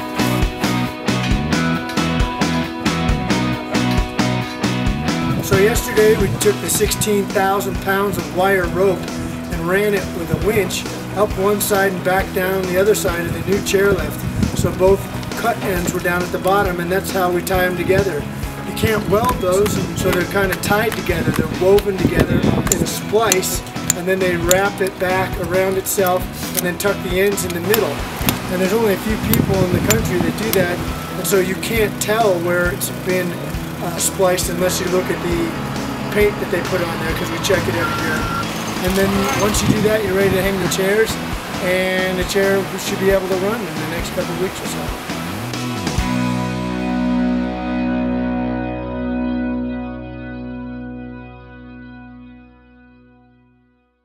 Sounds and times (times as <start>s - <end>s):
Effects unit: 0.0s - 9.8s, 44.9s - 54.0s.